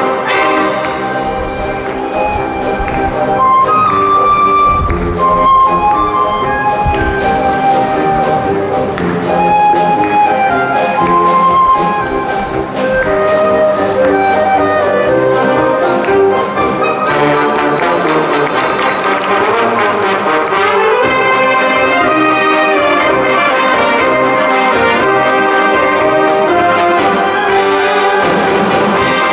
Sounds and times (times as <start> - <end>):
Brass instrument: 0.0 - 29.3
Orchestra: 0.0 - 29.3.